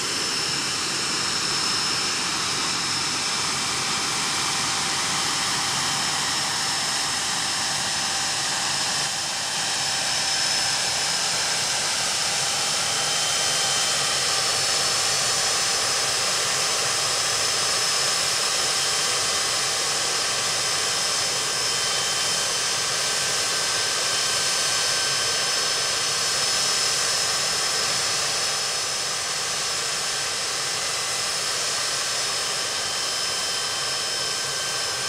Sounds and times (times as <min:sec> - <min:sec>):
Aircraft engine: 0:00.0 - 0:35.0.